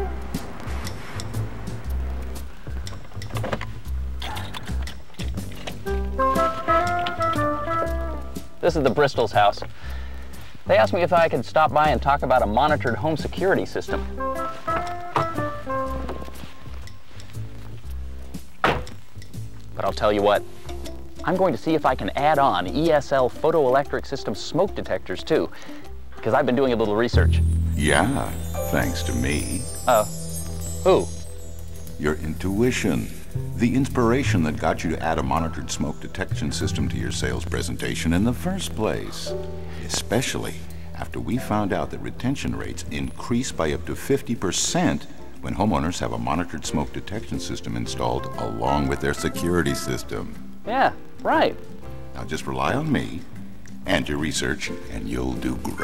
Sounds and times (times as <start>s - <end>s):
Music: 0.0s - 55.8s
Speech: 8.6s - 9.7s, 10.7s - 14.0s, 19.8s - 20.4s, 21.2s - 25.5s, 26.2s - 30.1s, 32.0s - 51.6s, 52.2s - 55.8s.